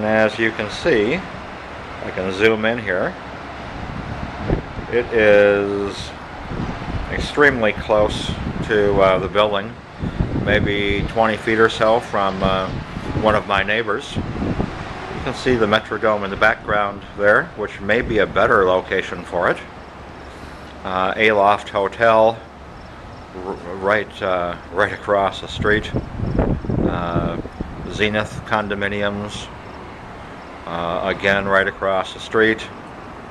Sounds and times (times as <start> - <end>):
Speech: 0.0 - 1.3, 2.0 - 3.2, 4.9 - 6.2, 7.1 - 9.8, 10.4 - 14.3, 15.2 - 19.7, 20.8 - 22.5, 23.4 - 26.0, 26.9 - 29.5, 30.7 - 32.8.